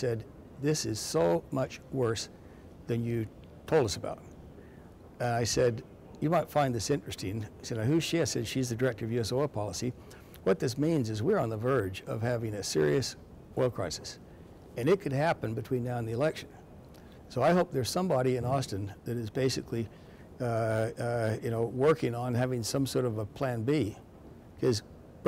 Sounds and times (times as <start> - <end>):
Speech: 0.0 - 2.3, 2.9 - 4.3, 5.2 - 14.2, 14.8 - 16.6, 17.3 - 24.0, 24.6 - 25.2.